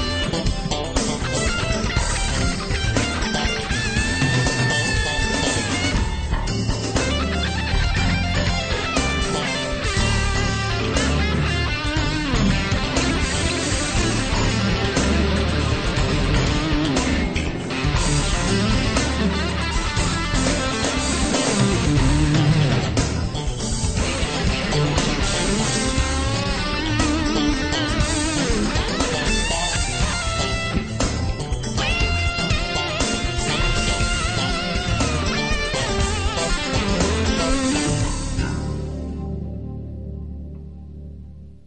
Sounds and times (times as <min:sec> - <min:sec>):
Progressive rock: 0:00.0 - 0:41.1
Bass guitar: 0:00.0 - 0:41.6
Electric guitar: 0:00.0 - 0:41.6.